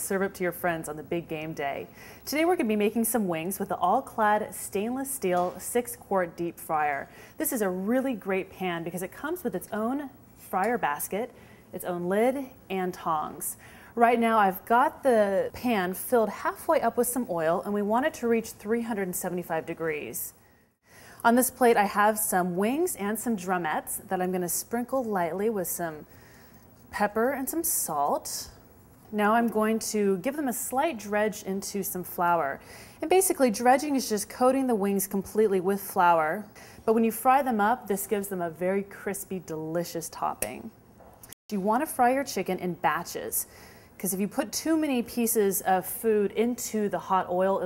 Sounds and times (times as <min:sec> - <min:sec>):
Speech: 0:00.0 - 0:20.4, 0:21.2 - 0:26.0, 0:26.9 - 0:40.8, 0:41.5 - 0:47.6.